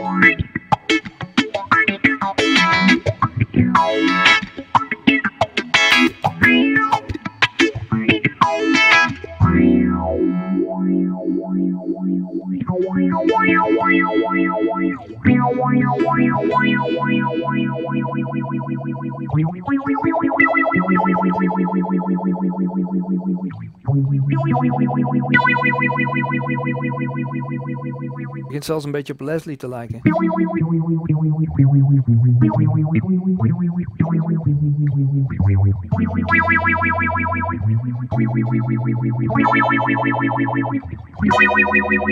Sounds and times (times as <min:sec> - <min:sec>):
Effects unit: 0:00.0 - 0:28.6, 0:30.0 - 0:42.1
Electric guitar: 0:00.0 - 0:28.6, 0:30.0 - 0:42.1
Speech: 0:28.5 - 0:30.2.